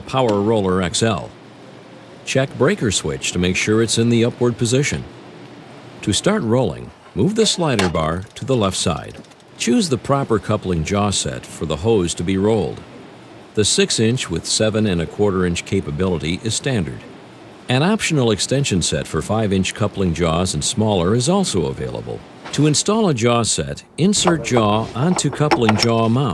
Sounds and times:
Speech: 0.0 - 1.4, 2.3 - 5.1, 6.0 - 12.9, 13.6 - 17.1, 17.7 - 26.3.

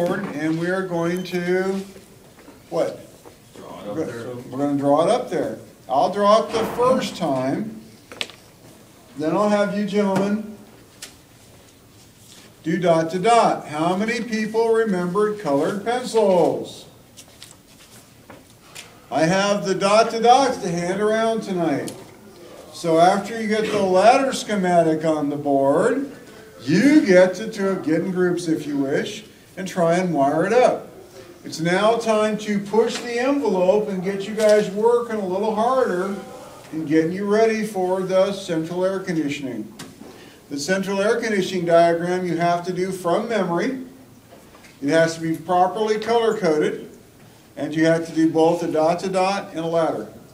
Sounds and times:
Speech: 0.0 - 2.0, 2.7 - 7.8, 9.2 - 10.6, 12.6 - 16.9, 19.1 - 39.8, 40.5 - 44.0, 44.8 - 47.0, 47.6 - 50.2.

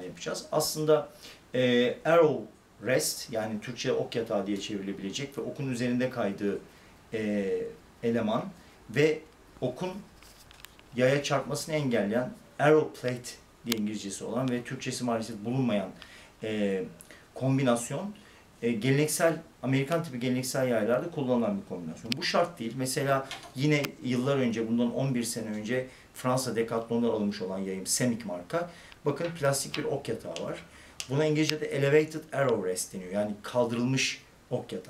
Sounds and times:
Speech: 0.0 - 10.1, 11.0 - 34.9.

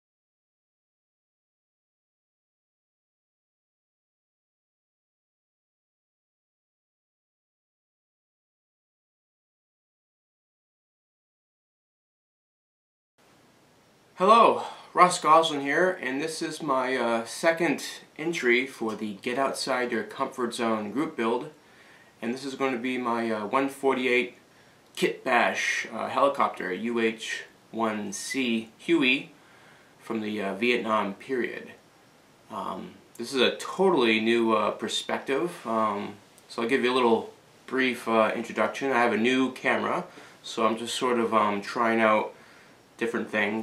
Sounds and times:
Speech: 14.2 - 21.6, 22.2 - 24.4, 25.0 - 29.4, 30.0 - 31.8, 32.5 - 42.4, 43.0 - 43.6.

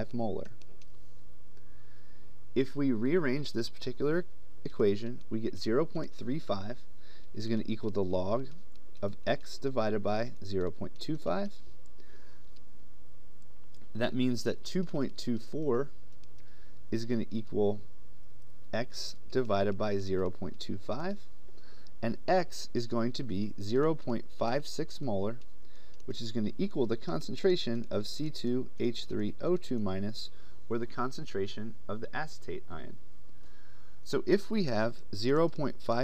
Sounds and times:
Speech: 0.0 - 0.6, 2.6 - 11.6, 13.9 - 15.9, 16.9 - 17.8, 18.7 - 21.3, 22.0 - 25.4, 26.1 - 33.0, 34.0 - 36.0.

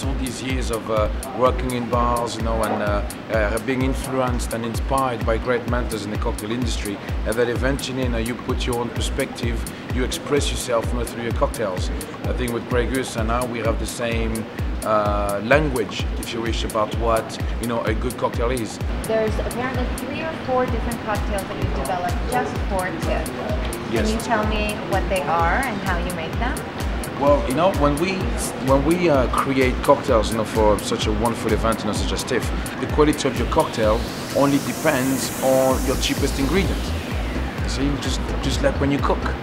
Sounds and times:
Speech: 0.0 - 26.6, 27.2 - 36.9, 37.7 - 39.4
Music: 0.0 - 39.4.

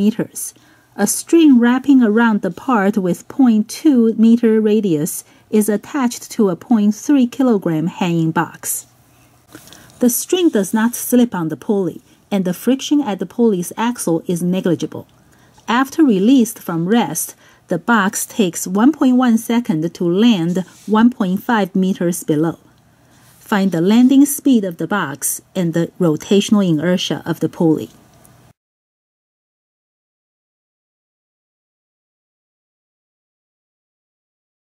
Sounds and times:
Speech: 0.0 - 8.9, 10.0 - 15.1, 15.7 - 22.7, 23.4 - 28.0.

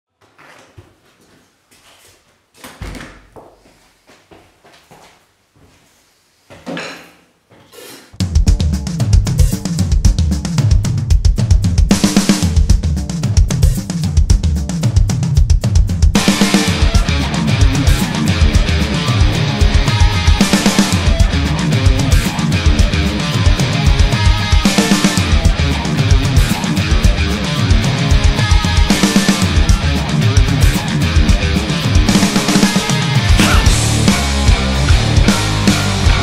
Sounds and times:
Drum: 8.2 - 36.2
Drum kit: 8.2 - 36.2.

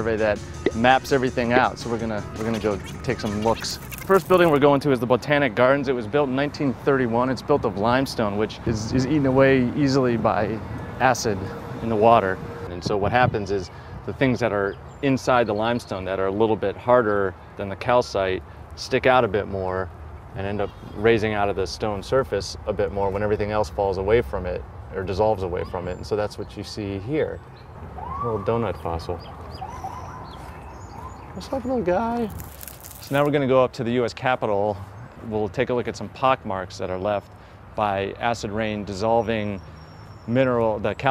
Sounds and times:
Speech: 0.0 - 27.4, 28.2 - 29.2, 31.4 - 32.4, 33.1 - 39.6, 40.3 - 41.1.

